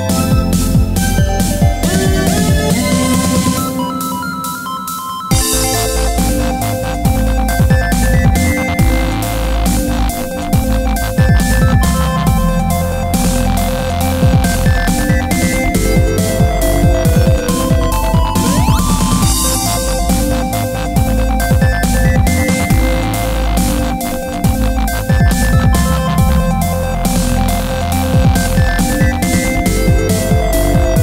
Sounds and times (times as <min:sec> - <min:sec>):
Electronic music: 0:00.0 - 0:31.0.